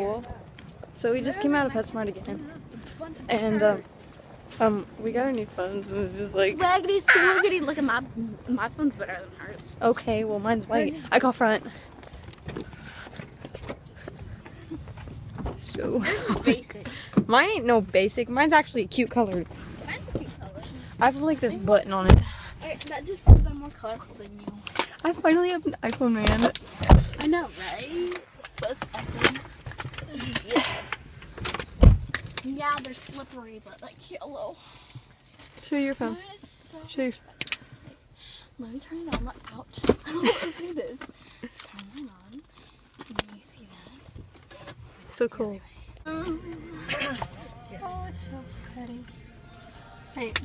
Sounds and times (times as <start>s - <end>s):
Female speech, woman speaking: 0.0s - 0.4s, 1.0s - 3.9s, 4.6s - 11.7s, 15.6s - 26.6s, 27.2s - 29.4s, 30.0s - 30.8s, 32.4s - 34.6s, 35.6s - 37.2s, 38.6s - 41.1s, 41.7s - 42.4s, 43.1s - 44.0s, 45.1s - 49.1s, 50.2s - 50.4s.